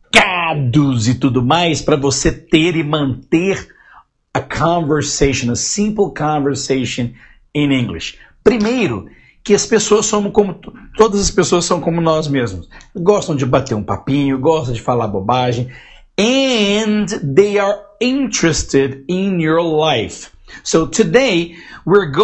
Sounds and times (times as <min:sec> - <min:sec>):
Speech: 0:00.0 - 0:22.2.